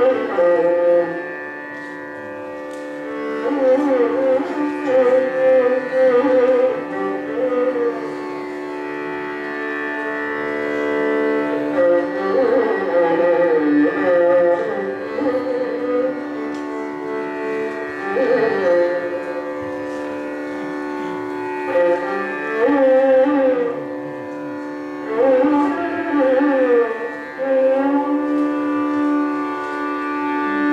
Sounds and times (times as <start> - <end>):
Violin, fiddle: 0.0 - 30.7.